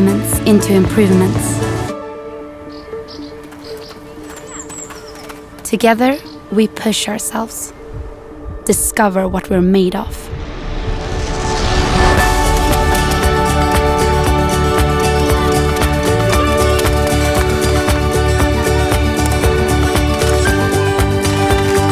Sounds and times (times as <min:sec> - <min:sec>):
Music: 0:00.0 - 0:21.9.